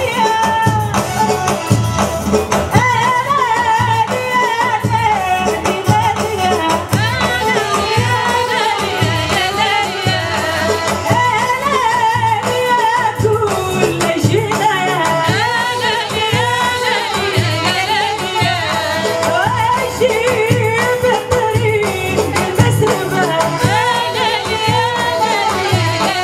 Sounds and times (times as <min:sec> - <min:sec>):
Music: 0:00.0 - 0:26.2.